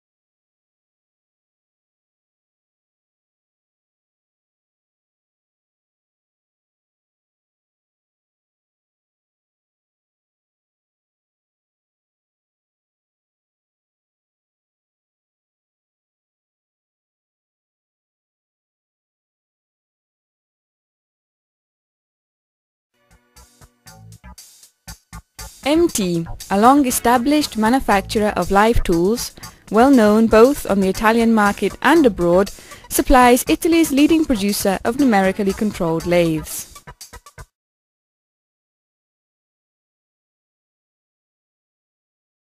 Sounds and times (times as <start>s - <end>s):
Music: 23.0s - 37.6s
Speech: 25.7s - 36.7s.